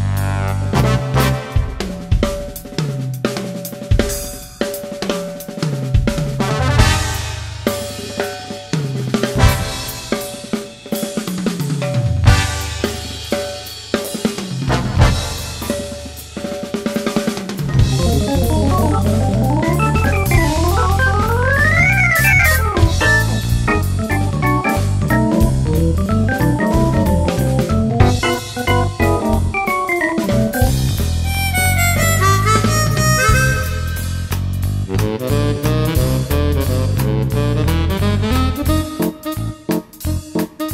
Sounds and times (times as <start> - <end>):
Accordion: 17.8 - 25.5, 26.2 - 34.2.